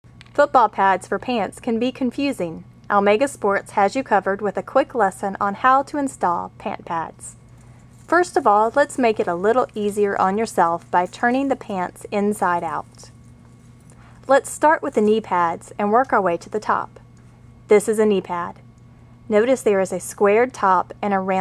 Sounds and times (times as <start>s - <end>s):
Speech: 0.4s - 7.4s, 8.1s - 13.1s, 14.3s - 17.0s, 17.7s - 18.6s, 19.3s - 21.4s.